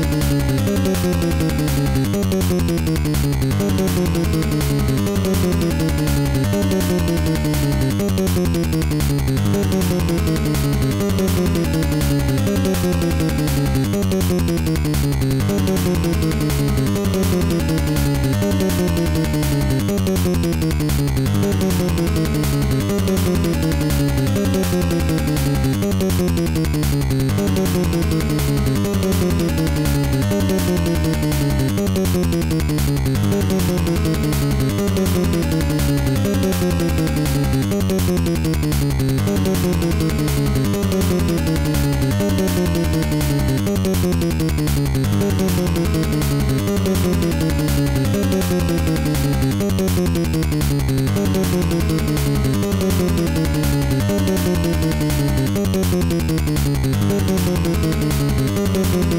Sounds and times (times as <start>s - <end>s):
Music: 0.0s - 59.1s.